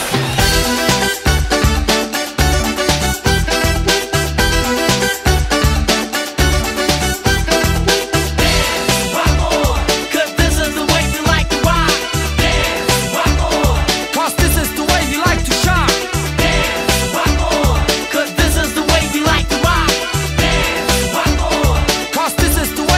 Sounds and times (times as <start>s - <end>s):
Exciting music: 0.0s - 22.9s.